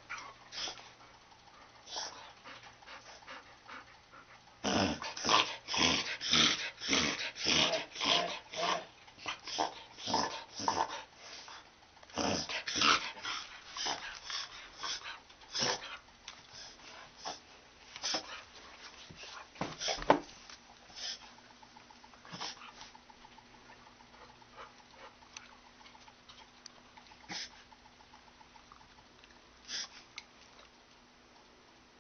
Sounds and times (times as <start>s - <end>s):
Inside, small room: 0.0s - 32.0s.